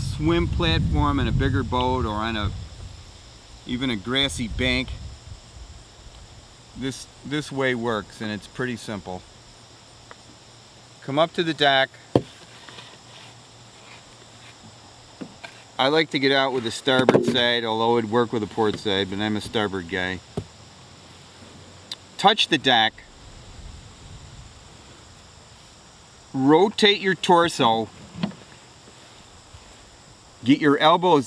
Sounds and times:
Speech: 0:00.0 - 0:02.5, 0:03.7 - 0:05.0, 0:06.8 - 0:09.2, 0:11.0 - 0:12.0, 0:15.8 - 0:20.2, 0:22.2 - 0:23.1, 0:26.4 - 0:27.9, 0:30.4 - 0:31.2.

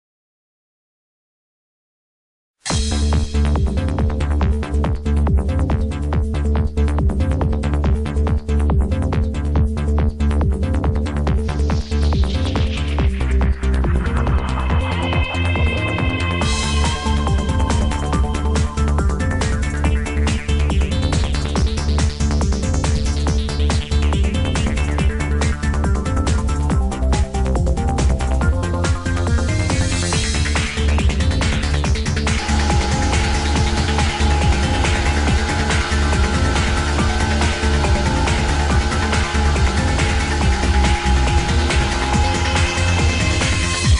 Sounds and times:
Music: 0:02.6 - 0:43.9.

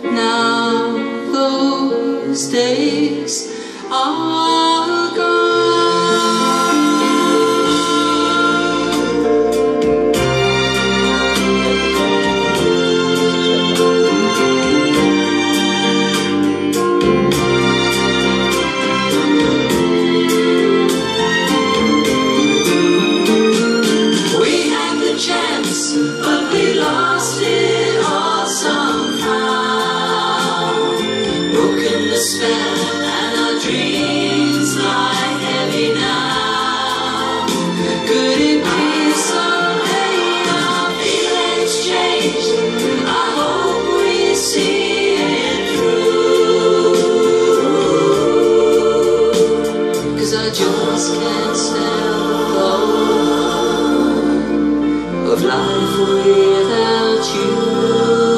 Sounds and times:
Gospel music: 0:00.0 - 0:58.3.

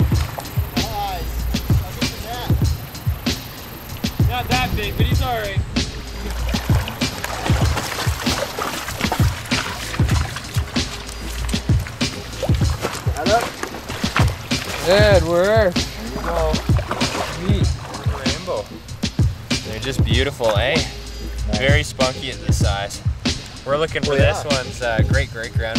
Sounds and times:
Music: 0:00.0 - 0:25.7
Speech: 0:00.8 - 0:02.5, 0:04.3 - 0:06.4, 0:14.8 - 0:16.6, 0:17.4 - 0:18.7, 0:19.6 - 0:23.0, 0:23.6 - 0:25.7.

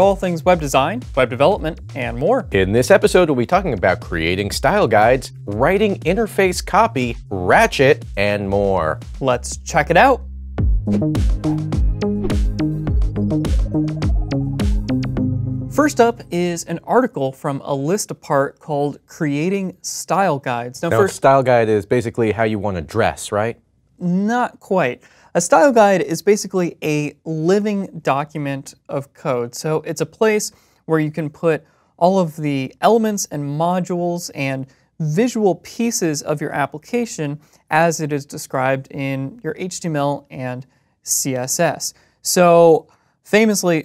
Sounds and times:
Speech: 0:00.0 - 0:10.2, 0:15.8 - 0:43.8.

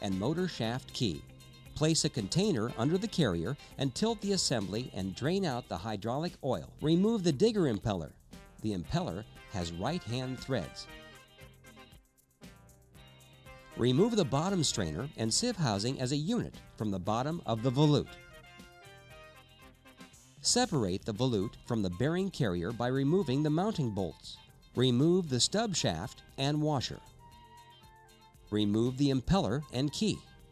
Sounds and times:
Speech: 0:00.0 - 0:01.2, 0:01.8 - 0:10.9, 0:13.8 - 0:18.2, 0:20.4 - 0:27.0, 0:28.5 - 0:30.3
Music: 0:00.0 - 0:30.5.

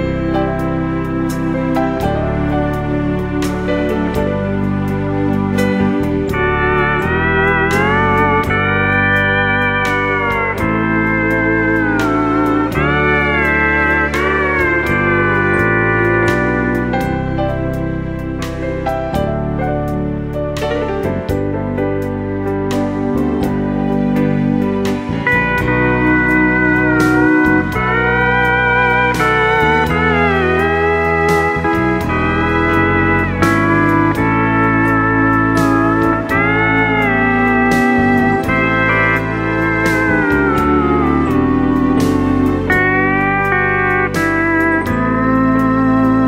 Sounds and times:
Steel guitar, slide guitar: 0:00.0 - 0:46.2.

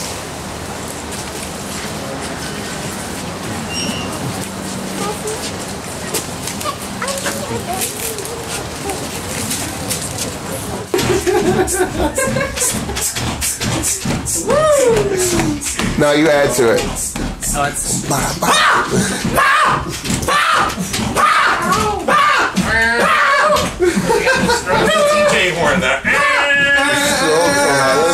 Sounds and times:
Children playing: 0:04.1 - 0:12.7, 0:18.3 - 0:28.1.

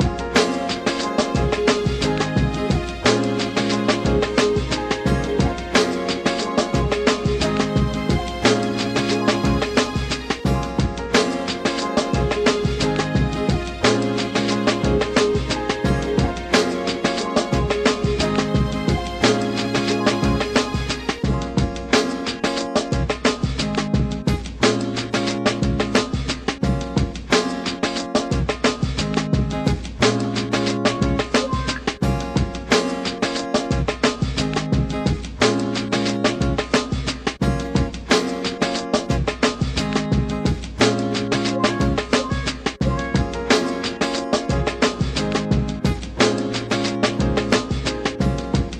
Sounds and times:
Electric guitar: 0:00.0 - 0:36.8, 0:37.4 - 0:48.8.

